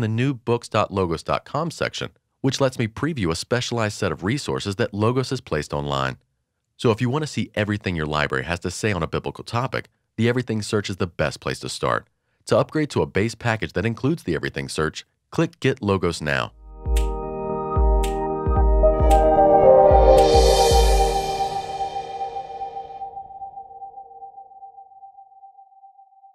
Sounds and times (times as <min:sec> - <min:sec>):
Speech: 0:00.0 - 0:06.2, 0:06.8 - 0:16.5
Music: 0:16.6 - 0:24.5.